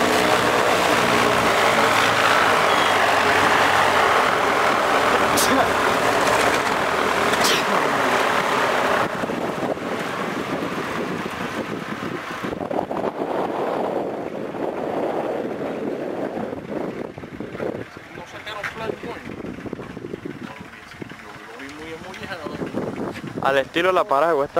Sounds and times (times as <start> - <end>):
Propeller, airscrew: 0.0 - 24.5
Wind noise (microphone): 9.0 - 18.0, 18.7 - 21.2, 22.0 - 23.8
Speech: 18.1 - 19.3, 20.4 - 22.7, 23.4 - 24.5.